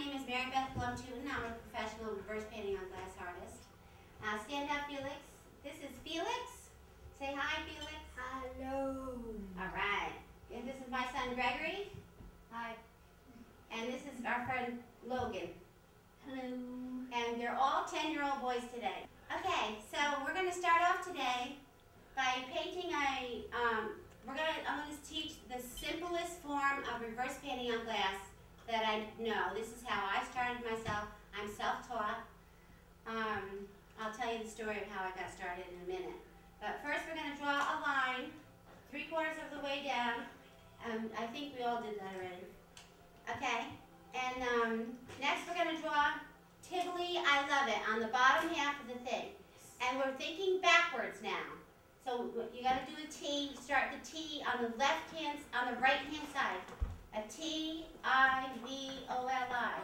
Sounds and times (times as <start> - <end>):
Speech: 0.0 - 12.9, 13.7 - 15.6, 16.2 - 21.6, 22.2 - 32.3, 33.1 - 42.5, 43.3 - 59.8.